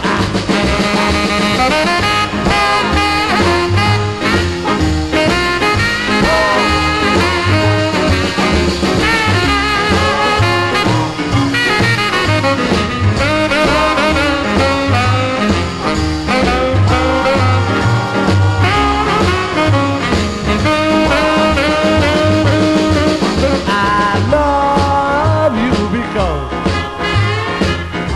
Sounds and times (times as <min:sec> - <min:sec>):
Music: 0:00.0 - 0:28.1.